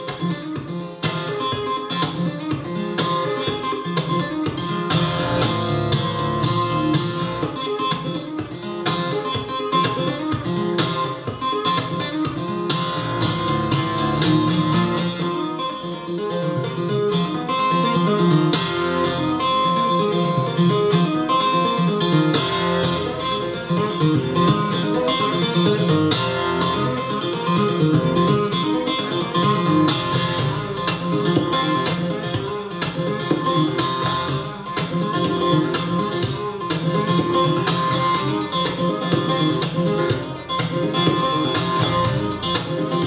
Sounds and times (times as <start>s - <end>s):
Guitar: 0.0s - 43.0s.